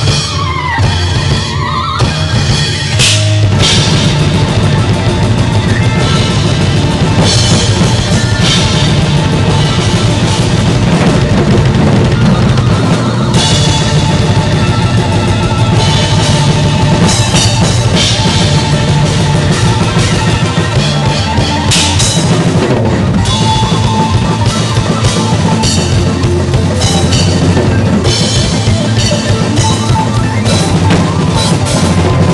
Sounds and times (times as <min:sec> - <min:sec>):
Bass drum: 0:00.0 - 0:32.3
Drum kit: 0:00.0 - 0:32.3
Drum roll: 0:00.0 - 0:32.3.